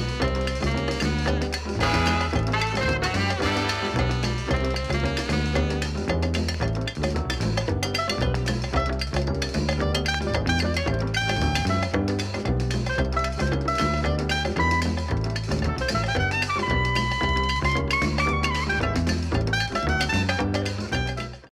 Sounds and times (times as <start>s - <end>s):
Music: 0.0s - 21.5s.